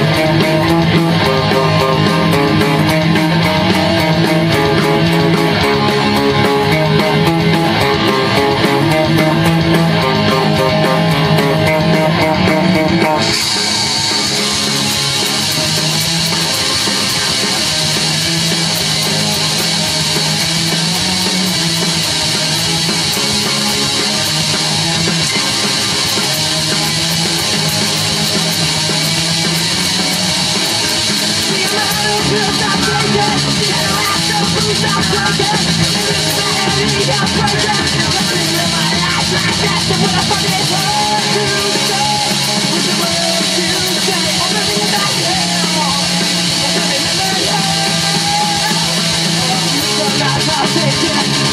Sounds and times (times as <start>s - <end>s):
Guitar: 0.0s - 51.5s.